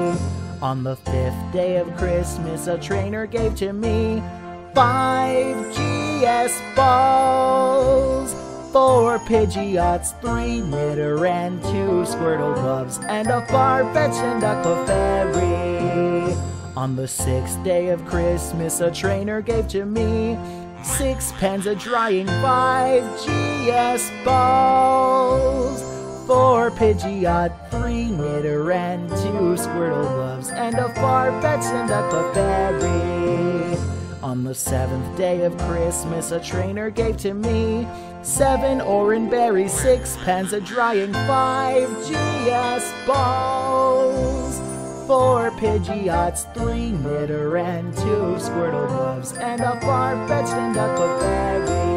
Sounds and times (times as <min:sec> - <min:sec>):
Music for children: 0:00.0 - 0:51.9.